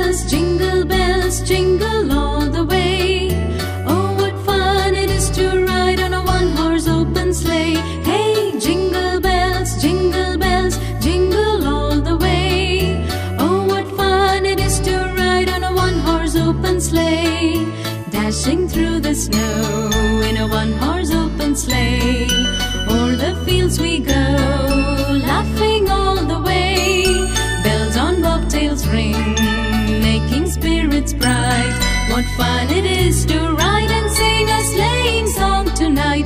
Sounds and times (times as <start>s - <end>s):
Music for children: 0.0s - 36.2s
Jingle bell: 19.0s - 35.8s.